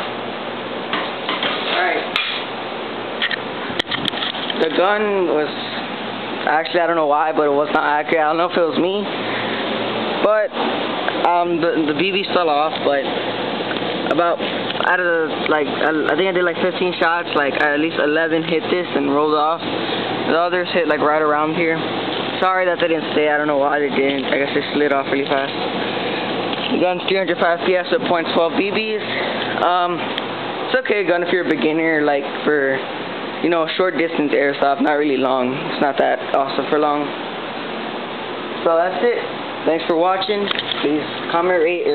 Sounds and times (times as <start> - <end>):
Speech: 1.7 - 2.2, 4.6 - 5.8, 6.4 - 9.1, 10.2 - 10.6, 11.2 - 13.1, 14.0 - 19.7, 20.3 - 25.6, 26.7 - 30.1, 30.7 - 37.2, 38.6 - 41.9.